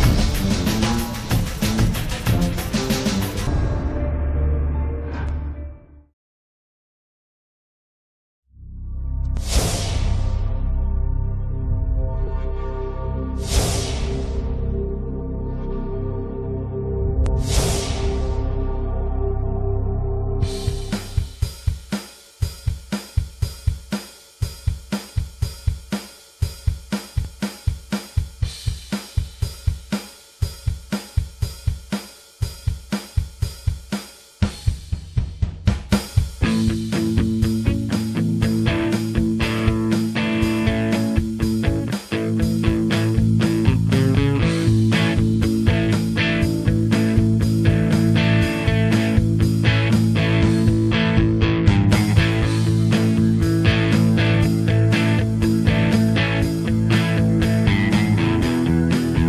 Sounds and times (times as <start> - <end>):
Music: 0.0 - 6.2, 8.5 - 59.2.